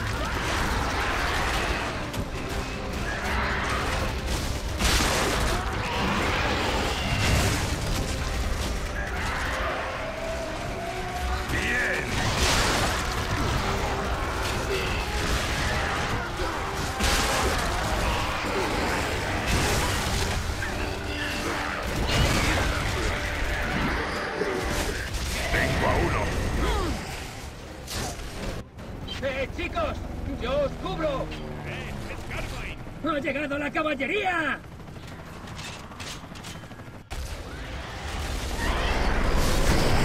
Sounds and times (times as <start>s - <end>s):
Music: 0.0s - 29.5s.